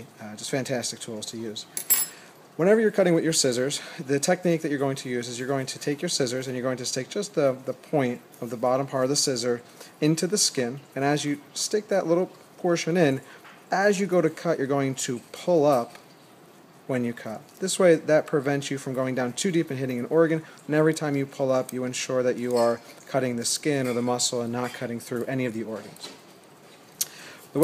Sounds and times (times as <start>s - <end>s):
Speech: 0.0s - 1.7s, 2.6s - 16.0s, 16.9s - 26.2s.